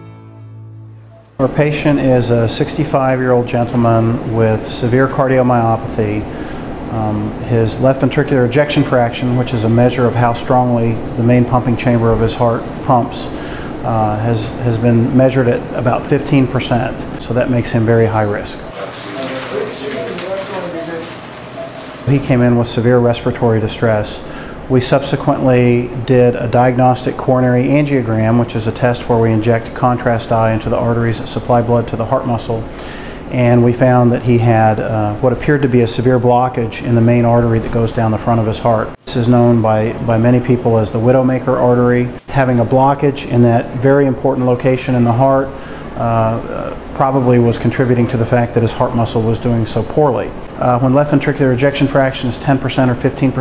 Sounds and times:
Speech: 0:01.4 - 0:06.3, 0:06.9 - 0:21.2, 0:22.1 - 0:32.7, 0:33.3 - 0:53.4.

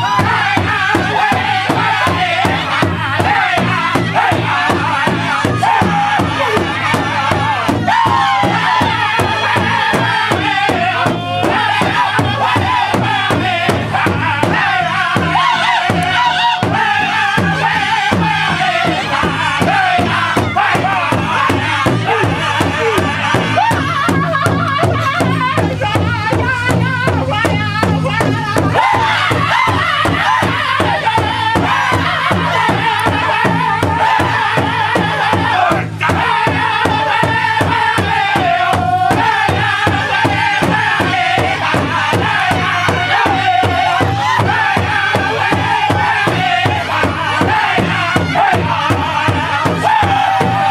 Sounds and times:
Male singing: 0:00.0 - 0:50.7
Music: 0:00.0 - 0:50.7.

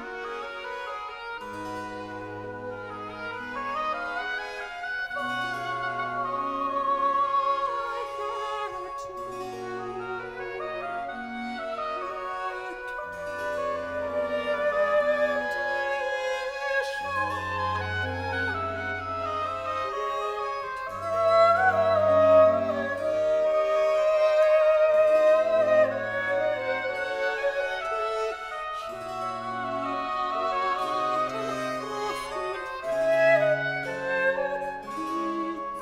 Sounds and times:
Brass instrument: 0:00.0 - 0:35.8.

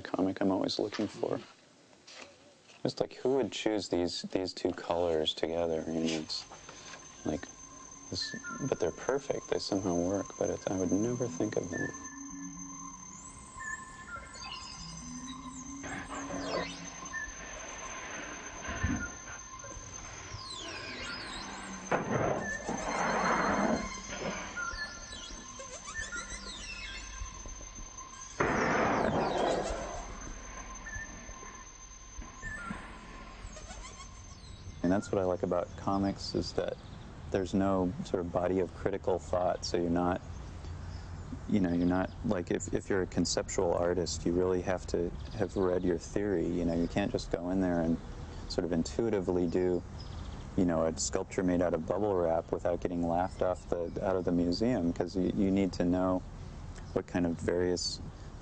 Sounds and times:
Music: 0:06.8 - 0:29.3.

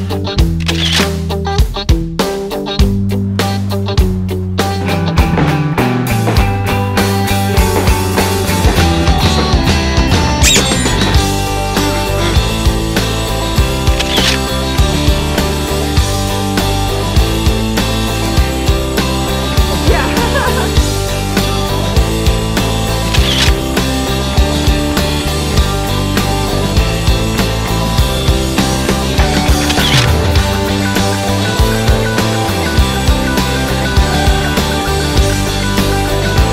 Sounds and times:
Music: 0:00.0 - 0:36.5.

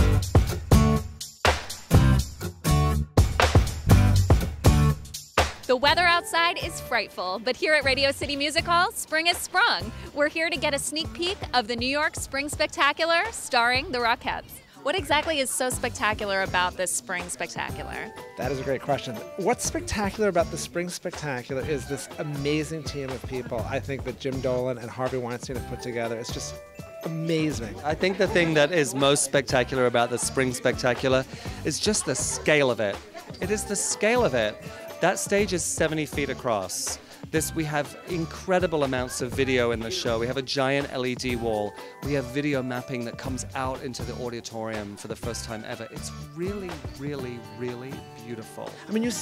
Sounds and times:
Music: 0:00.0 - 0:49.2
Speech: 0:05.7 - 0:49.2.

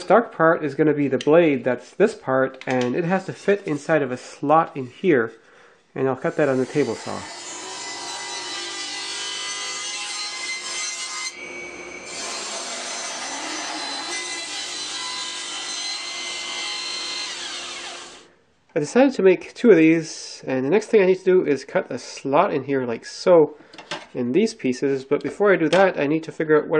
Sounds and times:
Power tool: 0:06.5 - 0:18.3.

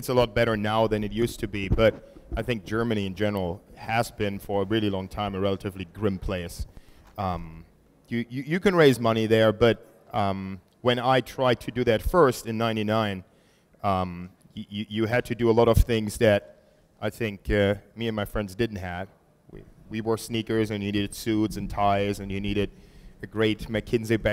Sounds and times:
Speech: 0:00.0 - 0:24.3.

